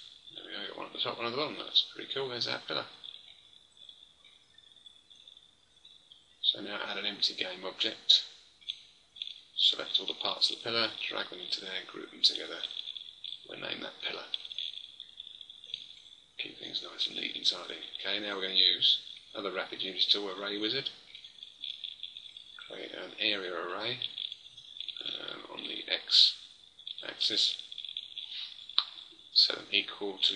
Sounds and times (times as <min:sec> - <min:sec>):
Inside, small room: 0:00.0 - 0:30.3
Speech: 0:00.4 - 0:03.0, 0:06.4 - 0:08.3, 0:09.6 - 0:12.8, 0:13.5 - 0:14.4, 0:16.4 - 0:21.0, 0:22.6 - 0:24.2, 0:25.0 - 0:26.4, 0:27.0 - 0:27.6, 0:28.8 - 0:30.3.